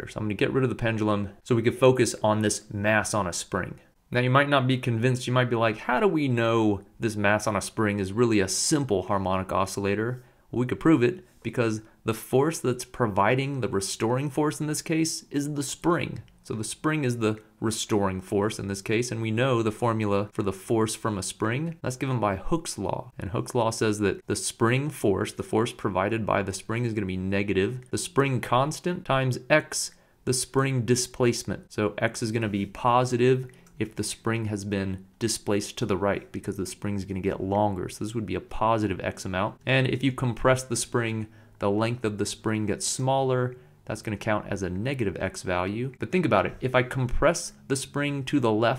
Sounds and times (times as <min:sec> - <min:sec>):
Speech: 0:00.0 - 0:48.7.